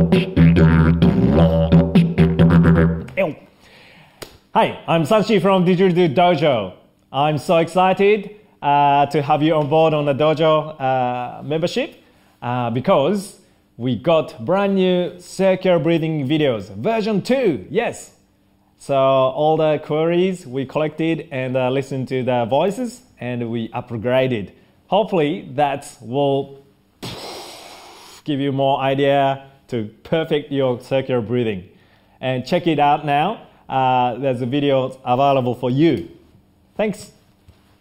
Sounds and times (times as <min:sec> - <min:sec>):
Speech: 0:03.1 - 0:03.5, 0:04.6 - 0:18.2, 0:18.8 - 0:26.6, 0:28.3 - 0:36.2, 0:36.8 - 0:37.2.